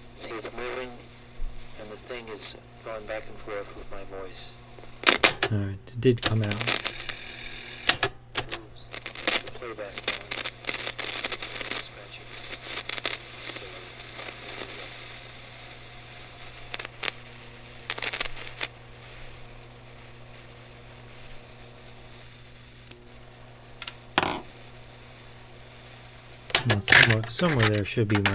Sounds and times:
Speech: 0.2 - 1.0, 1.8 - 4.6, 5.5 - 6.8, 8.7 - 10.4, 26.6 - 28.3.

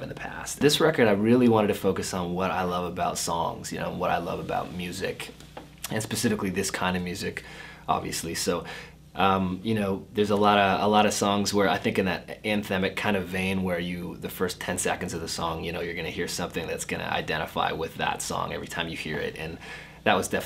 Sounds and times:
Speech: 0.0 - 20.4.

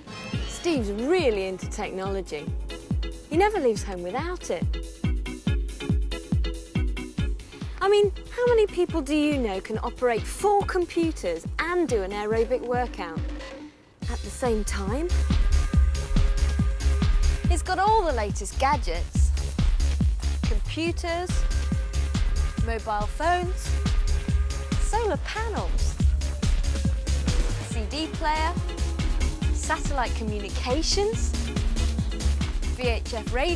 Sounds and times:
Music: 0.0 - 33.5
Speech: 0.6 - 2.5, 3.3 - 4.7, 7.8 - 13.2, 14.0 - 15.2, 17.5 - 19.3, 20.4 - 21.4, 22.6 - 23.7, 24.8 - 25.9, 27.7 - 28.6, 29.6 - 31.3, 32.8 - 33.5.

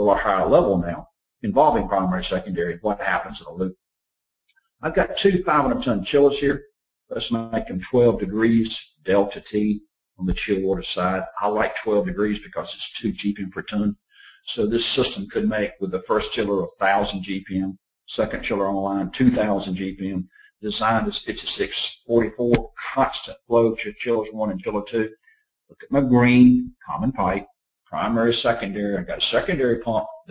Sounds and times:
Speech: 0.0 - 3.8, 4.8 - 30.3.

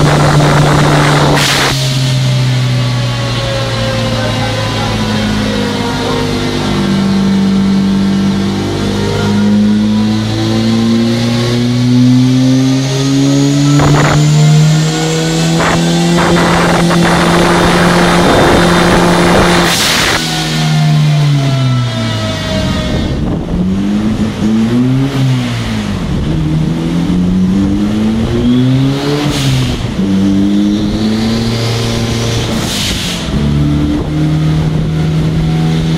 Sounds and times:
Speech: 4.1 - 6.9.

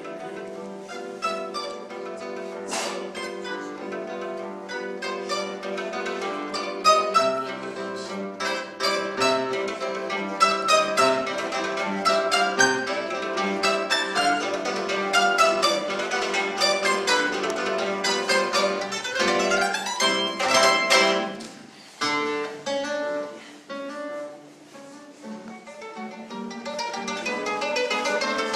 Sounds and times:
Guitar: 0.0 - 28.5
Mandolin: 0.0 - 28.5.

